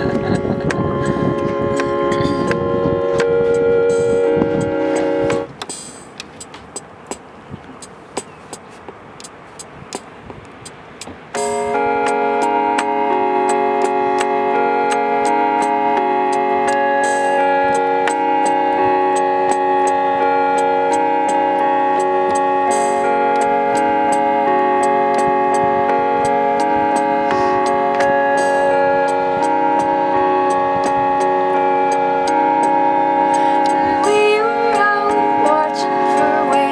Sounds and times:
Music: 0.0s - 6.9s, 11.0s - 36.7s.

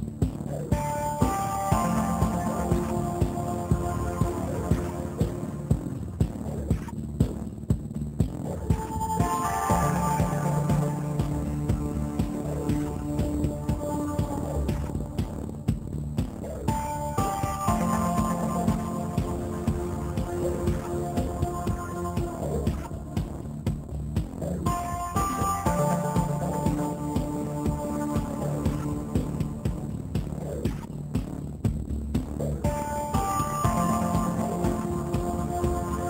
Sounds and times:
Music: 0.0s - 36.1s.

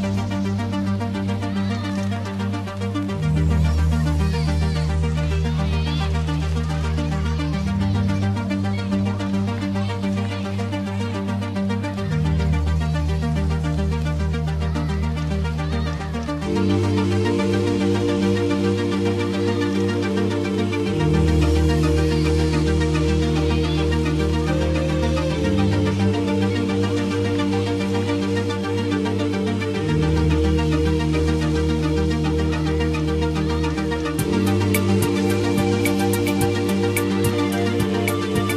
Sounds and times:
Music: 0.0s - 38.5s.

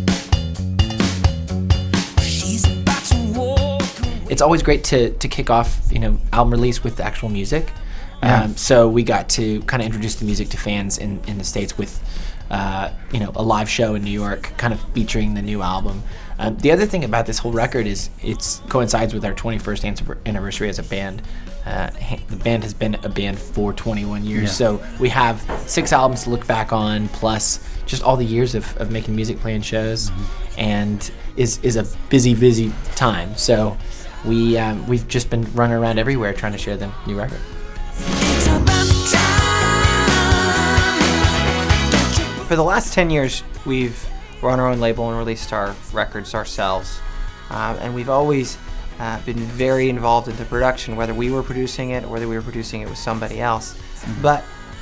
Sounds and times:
Music: 0.0s - 54.8s
Speech: 2.3s - 37.5s, 42.5s - 54.5s.

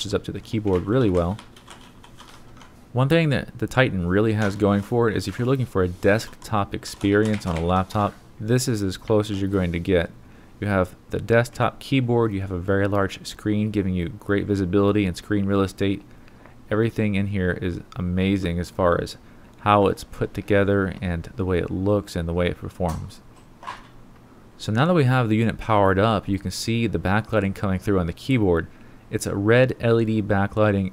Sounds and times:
Speech: 0.0s - 1.4s, 3.0s - 16.1s, 16.7s - 23.3s, 24.6s - 30.9s.

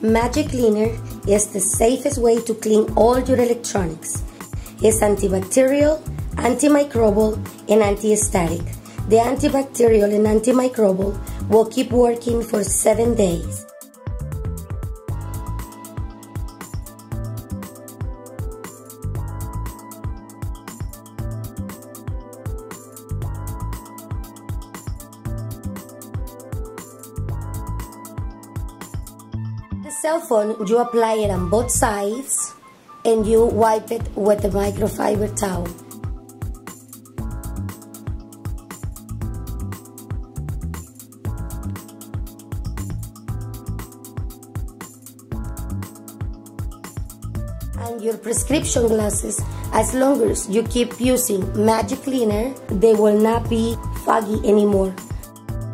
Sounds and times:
Speech: 0.0s - 4.2s, 4.8s - 13.6s, 29.9s - 35.8s, 47.8s - 55.1s
Music: 0.0s - 55.7s.

